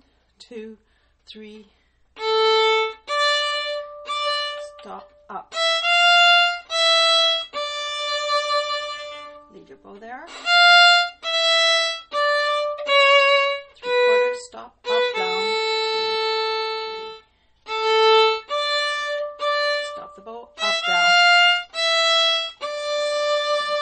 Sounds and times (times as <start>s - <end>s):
Speech: 0.4s - 1.7s, 4.3s - 5.6s, 9.5s - 10.4s, 14.4s - 15.6s, 19.6s - 21.2s
Violin, fiddle: 2.2s - 9.7s, 10.3s - 23.8s.